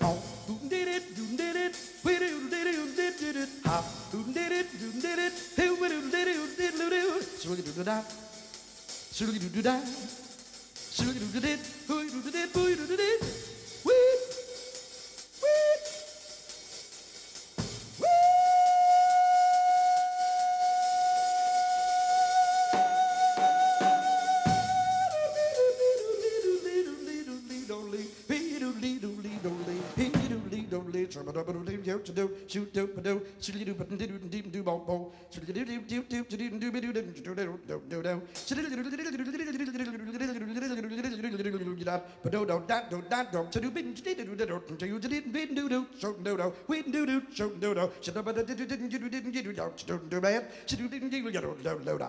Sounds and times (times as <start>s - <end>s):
Singing: 0.0s - 8.4s, 9.1s - 10.3s, 10.9s - 14.8s, 18.0s - 52.0s
Inside, large room or hall: 0.0s - 40.4s
Music: 0.0s - 42.4s.